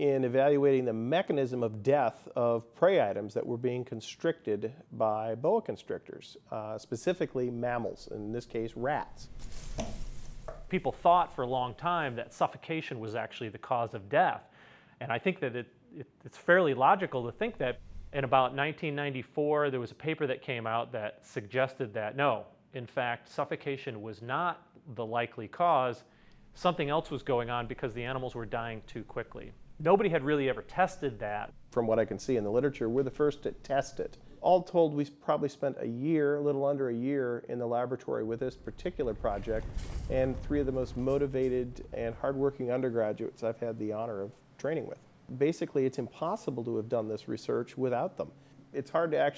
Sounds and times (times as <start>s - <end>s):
Speech: 0.0s - 10.0s, 10.7s - 49.3s.